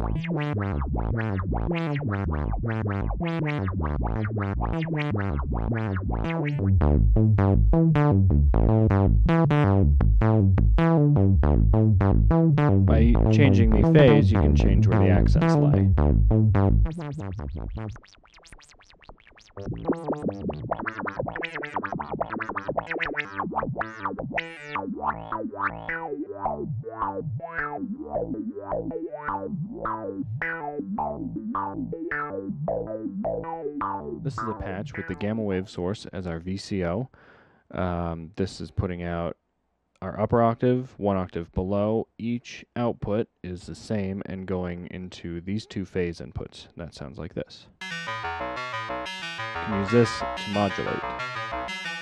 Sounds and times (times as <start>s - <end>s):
Synthesizer: 12.3s - 17.8s, 47.8s - 52.0s
Speech: 12.9s - 15.9s, 34.2s - 39.4s, 40.0s - 47.8s, 49.7s - 51.1s.